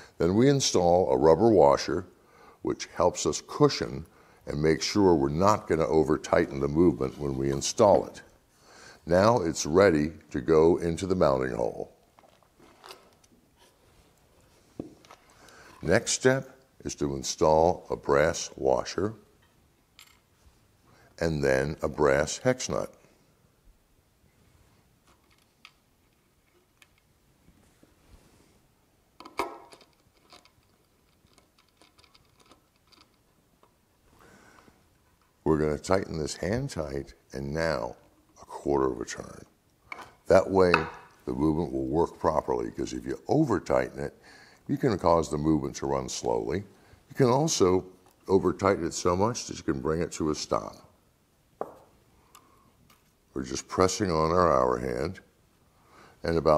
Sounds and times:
Speech: 0.2 - 8.3, 9.0 - 12.0, 15.8 - 19.2, 21.2 - 23.0, 35.4 - 39.5, 40.3 - 51.0, 53.4 - 55.3, 56.2 - 56.5.

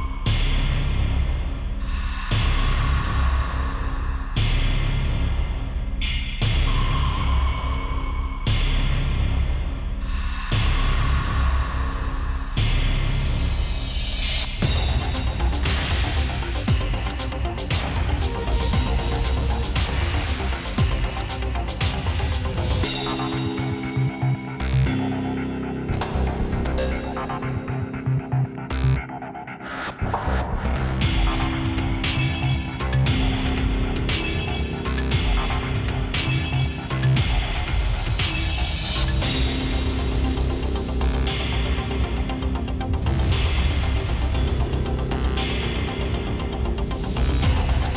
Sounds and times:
Music: 0.0 - 47.9.

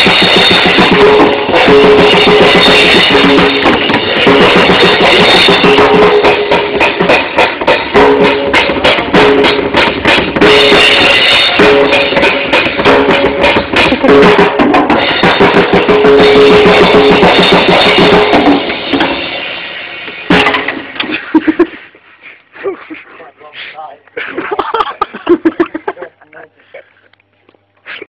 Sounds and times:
Speech: 23.1 - 24.1, 26.2 - 26.7.

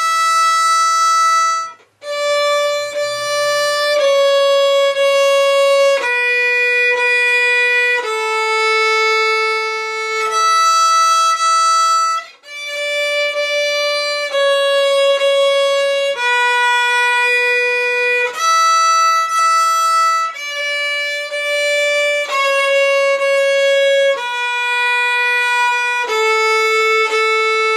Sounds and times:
Inside, small room: 0.0 - 27.7
Violin, fiddle: 0.0 - 27.7.

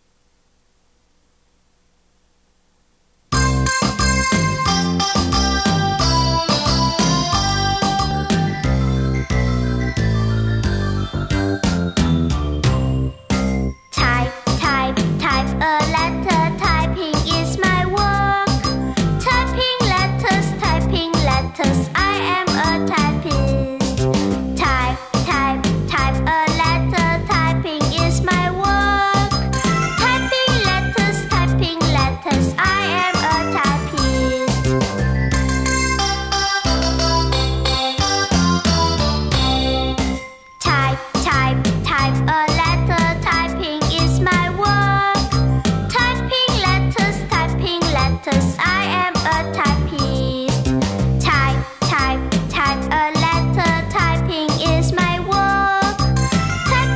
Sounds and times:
Music for children: 3.4 - 56.9.

